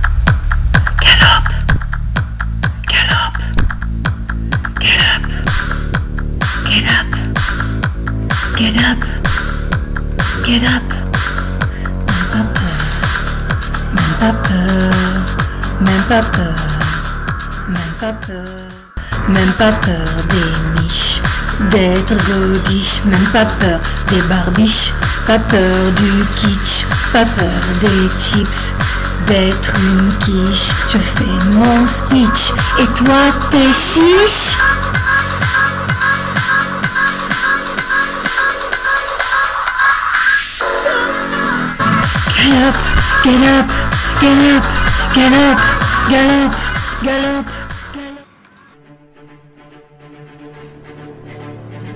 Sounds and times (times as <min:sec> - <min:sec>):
Music: 0:00.0 - 0:51.9.